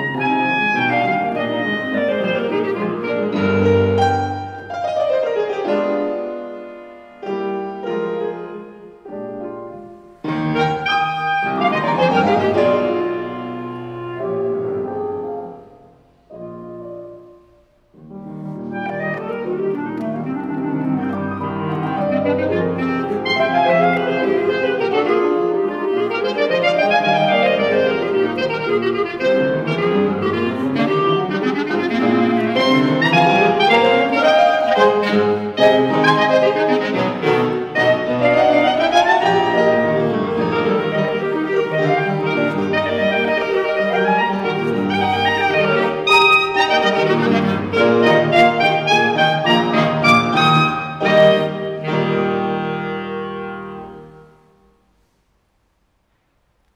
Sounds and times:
Clarinet: 0.0 - 55.2
Inside, large room or hall: 0.0 - 56.7
Piano: 0.0 - 56.7.

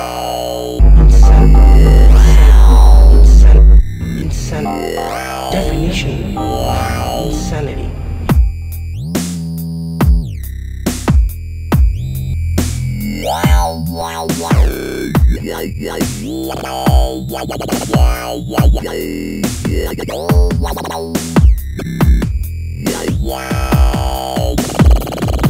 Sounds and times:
Speech: 0.0 - 8.0
Dubstep: 0.8 - 3.8.

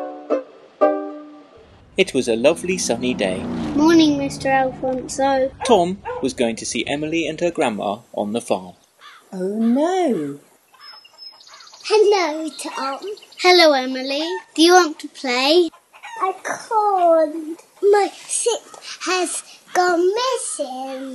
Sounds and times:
Child speech, kid speaking: 3.8 - 5.9, 11.8 - 21.1
Chirp, tweet: 10.7 - 13.5.

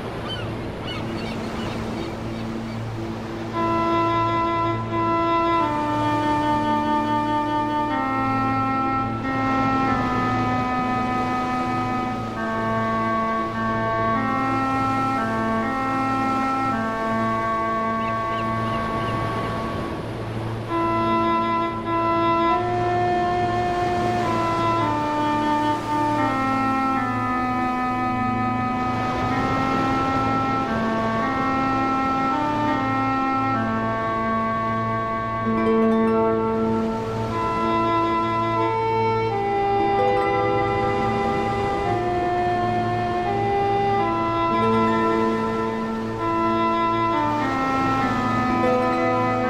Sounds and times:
Music: 0.0 - 49.5.

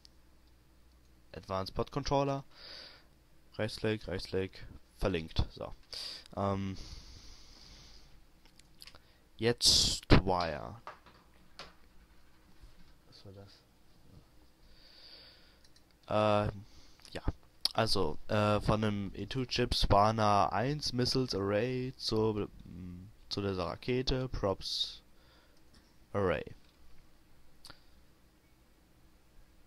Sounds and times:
Inside, small room: 0.0 - 29.6
Speech: 1.3 - 2.5, 3.6 - 5.8, 6.4 - 6.8, 9.4 - 10.8, 13.1 - 13.7, 16.1 - 25.0, 26.1 - 26.6.

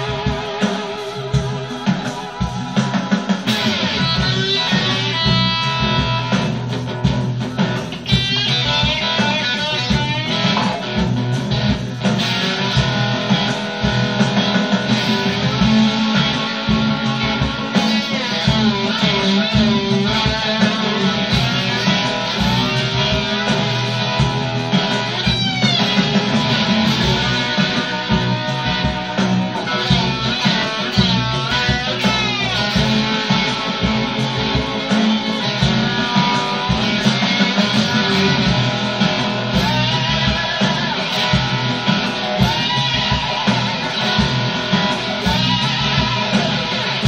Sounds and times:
Blues: 0.0 - 47.0
Electric guitar: 0.0 - 47.0
Strum: 0.0 - 47.0.

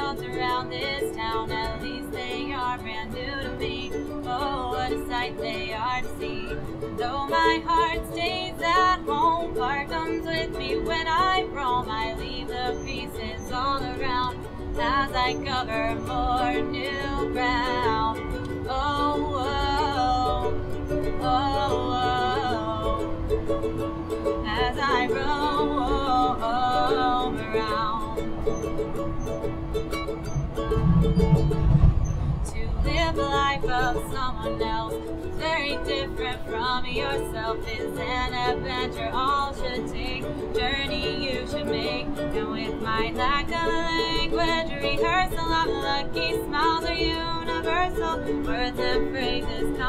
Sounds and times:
Music: 0.0 - 49.8.

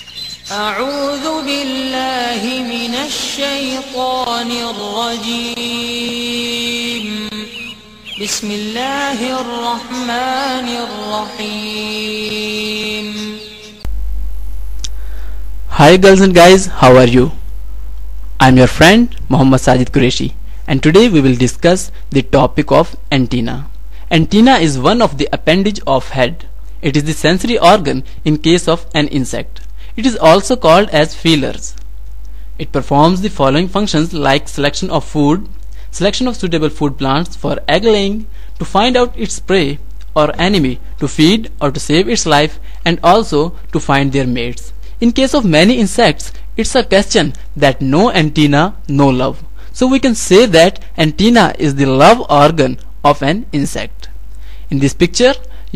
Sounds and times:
Speech: 15.7 - 17.4, 18.4 - 31.8, 32.6 - 54.1, 54.7 - 55.7.

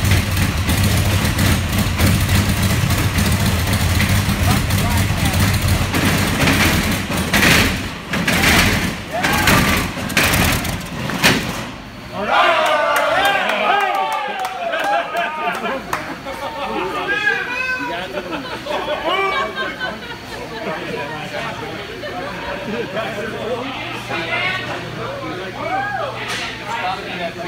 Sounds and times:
Truck: 0.0 - 12.1.

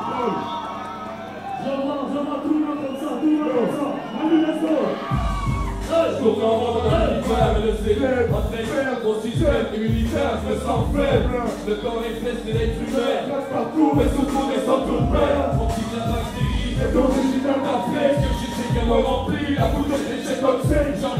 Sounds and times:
Music: 0.0 - 21.1
Speech: 1.6 - 5.0.

